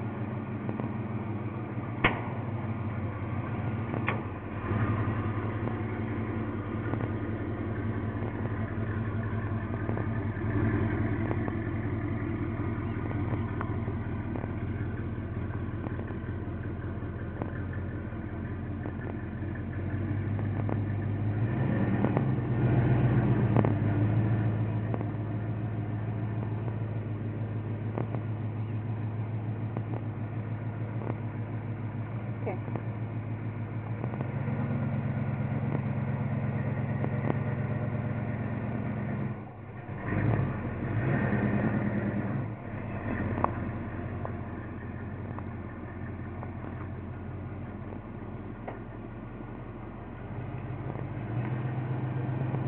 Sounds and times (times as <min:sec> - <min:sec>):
Vehicle: 0:00.0 - 0:52.6.